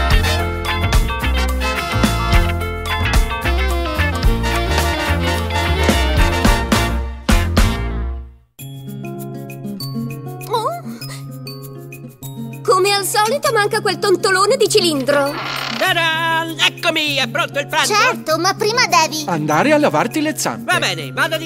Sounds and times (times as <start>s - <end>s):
Music: 0.0s - 21.4s.